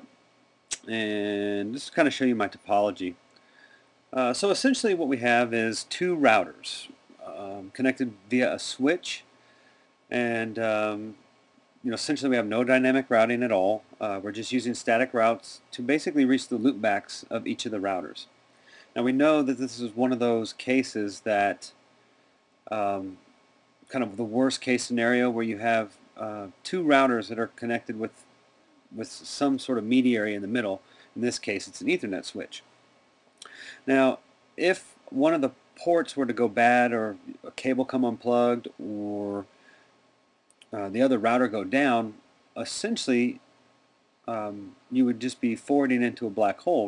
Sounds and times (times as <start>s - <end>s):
Speech: 0.8s - 3.2s, 4.1s - 9.3s, 10.1s - 11.2s, 11.8s - 18.4s, 19.0s - 21.8s, 22.7s - 23.3s, 23.9s - 28.3s, 28.9s - 32.7s, 33.8s - 39.5s, 40.6s - 43.5s, 44.3s - 46.8s.